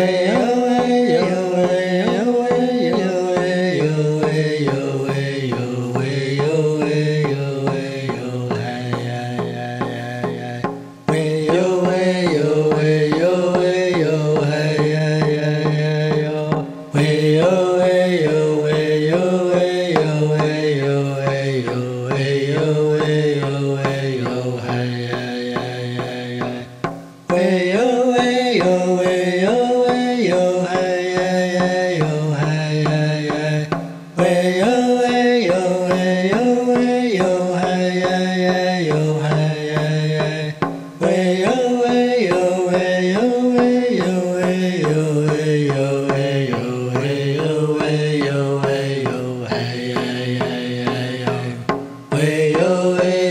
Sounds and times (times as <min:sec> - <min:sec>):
Mantra: 0:00.0 - 0:53.3.